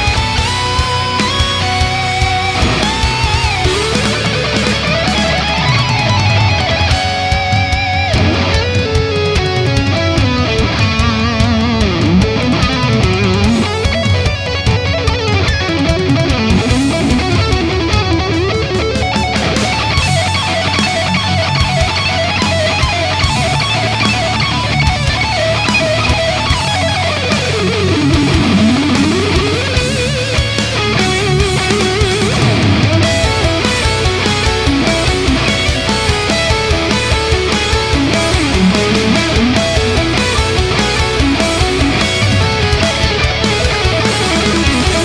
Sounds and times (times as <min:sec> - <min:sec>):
Guitar: 0:00.0 - 0:45.0
Heavy metal: 0:00.0 - 0:45.0.